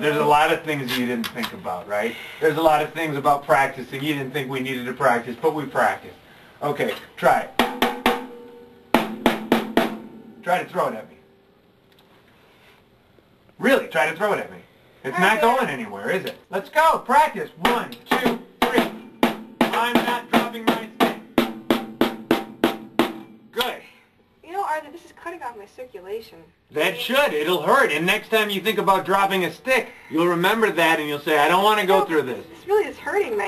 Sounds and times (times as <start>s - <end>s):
Snare drum: 7.6s - 8.4s, 9.0s - 10.2s, 17.6s - 23.3s.